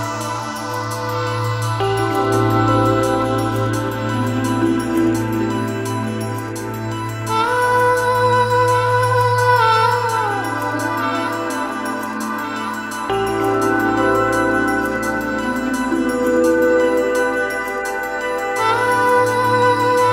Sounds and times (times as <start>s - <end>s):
New-age music: 0.0s - 20.1s.